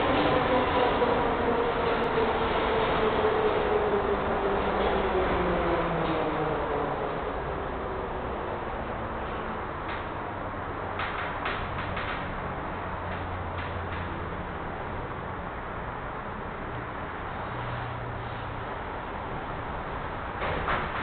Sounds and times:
Railroad car, train wagon: 0:00.0 - 0:21.0
Train: 0:00.0 - 0:21.0.

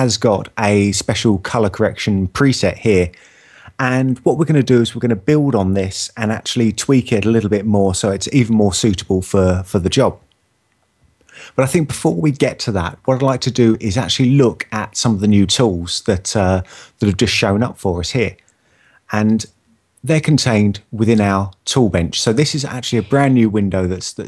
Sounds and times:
Speech: 0:00.0 - 0:10.2, 0:11.4 - 0:18.4, 0:19.1 - 0:24.2.

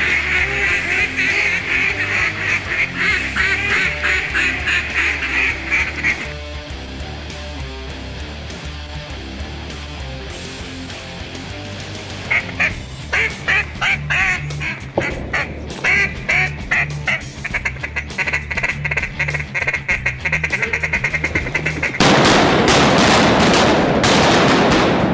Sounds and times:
Quack: 0:00.0 - 0:06.3, 0:12.3 - 0:22.1
Music: 0:00.0 - 0:25.1.

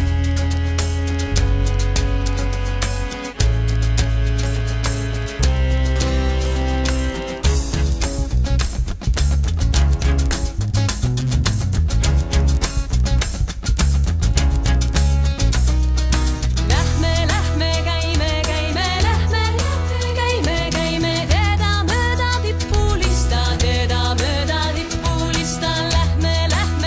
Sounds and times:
Folk music: 0:00.0 - 0:26.8
Music of Asia: 0:00.0 - 0:26.8.

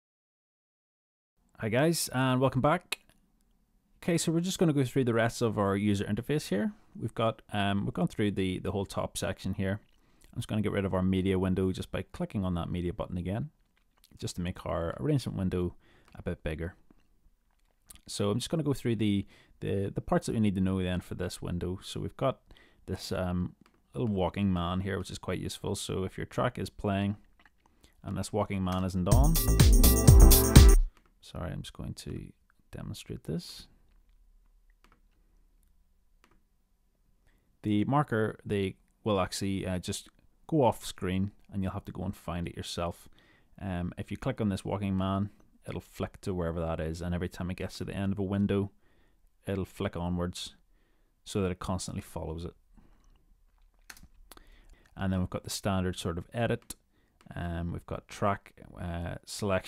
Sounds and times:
Speech: 0:01.6 - 0:03.1, 0:04.0 - 0:16.8, 0:17.9 - 0:27.2, 0:28.0 - 0:29.4, 0:31.2 - 0:33.8, 0:37.6 - 0:48.8, 0:49.4 - 0:50.6, 0:51.3 - 0:52.6, 0:55.0 - 0:59.6
Dance music: 0:29.1 - 0:30.9.

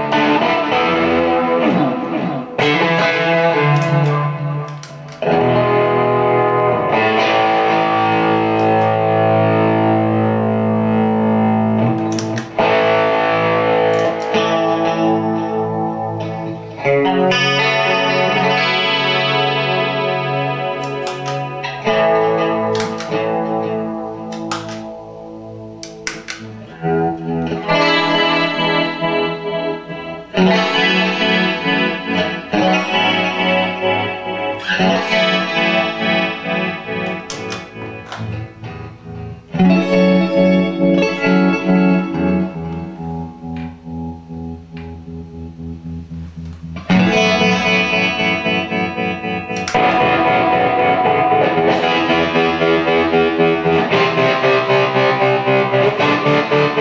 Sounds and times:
Distortion: 0:00.0 - 0:56.8
Effects unit: 0:00.0 - 0:56.8
Guitar: 0:00.0 - 0:56.8
Inside, small room: 0:00.0 - 0:56.8.

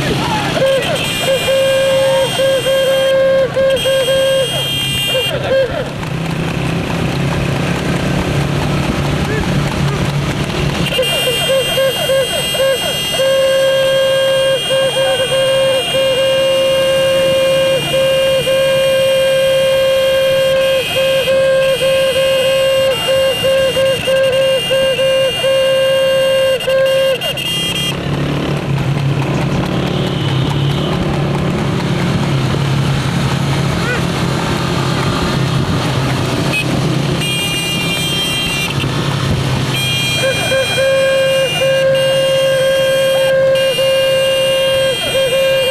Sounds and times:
Clip-clop: 0:05.4 - 0:11.8, 0:27.3 - 0:33.1.

